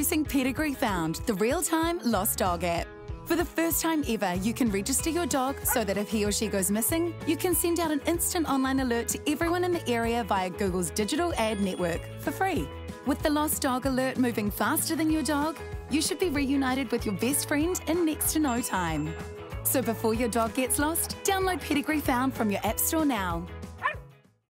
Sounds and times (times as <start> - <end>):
Speech: 0.0 - 19.1, 19.7 - 23.5
Music: 0.0 - 24.5
Bow-wow: 23.8 - 24.0.